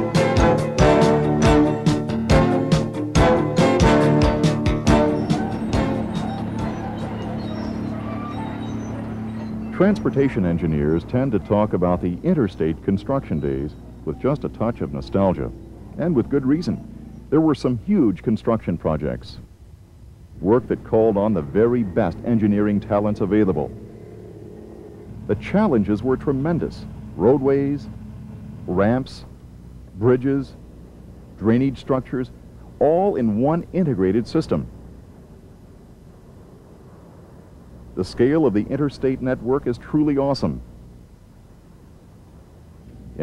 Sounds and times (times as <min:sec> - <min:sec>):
Speech: 0:09.7 - 0:19.5, 0:20.4 - 0:23.7, 0:25.3 - 0:27.9, 0:28.7 - 0:29.3, 0:30.0 - 0:30.6, 0:31.4 - 0:34.7, 0:38.0 - 0:40.6.